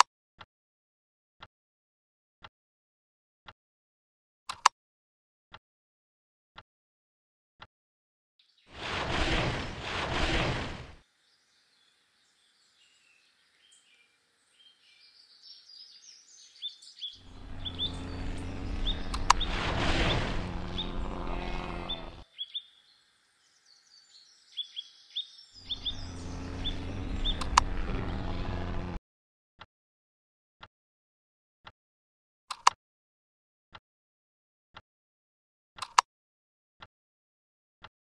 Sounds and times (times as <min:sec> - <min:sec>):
Chirp, tweet: 0:11.1 - 0:19.5, 0:21.7 - 0:27.5.